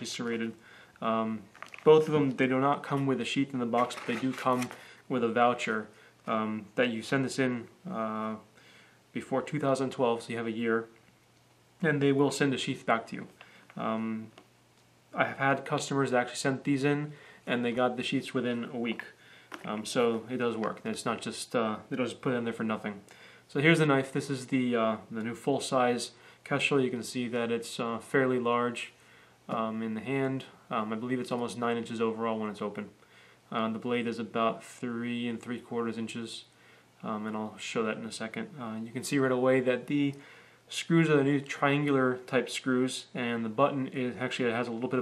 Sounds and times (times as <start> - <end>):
Speech: 0.0 - 8.5, 9.1 - 11.0, 11.8 - 14.4, 15.2 - 45.0.